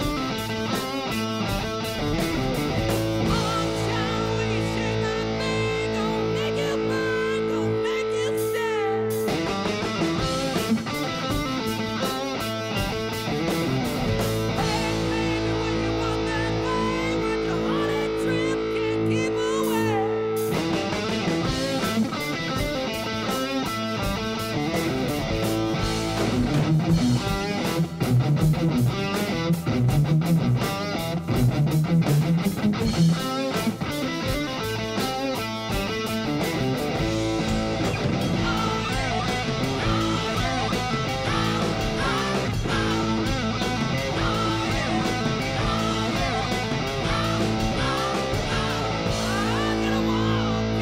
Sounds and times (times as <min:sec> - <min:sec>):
Electric guitar: 0:00.0 - 0:50.8.